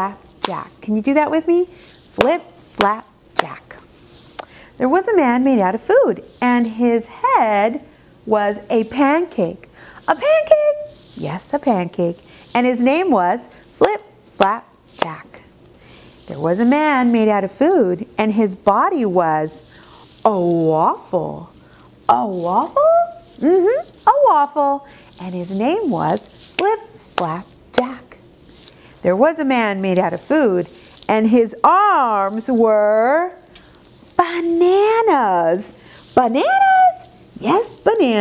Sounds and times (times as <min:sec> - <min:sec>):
Speech: 0:00.0 - 0:03.8, 0:04.8 - 0:15.4, 0:16.3 - 0:19.6, 0:20.2 - 0:21.5, 0:22.1 - 0:28.2, 0:29.0 - 0:33.4, 0:34.2 - 0:38.2.